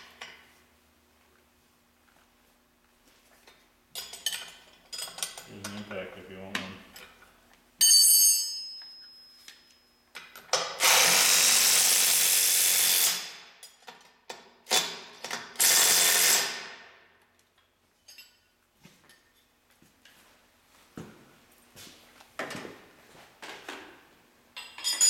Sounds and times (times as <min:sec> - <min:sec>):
Speech: 0:05.5 - 0:06.9.